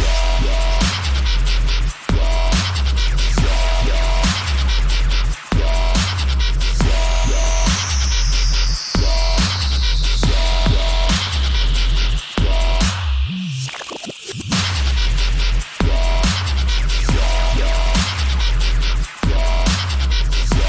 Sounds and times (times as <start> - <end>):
Dubstep: 0.0 - 20.6.